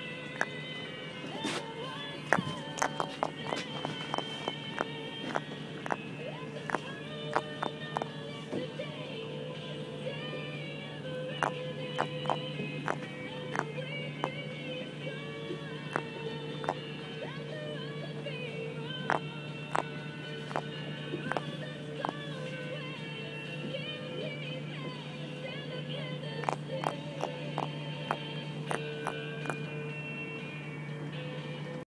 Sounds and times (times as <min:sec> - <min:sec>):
Music: 0:00.0 - 0:31.8.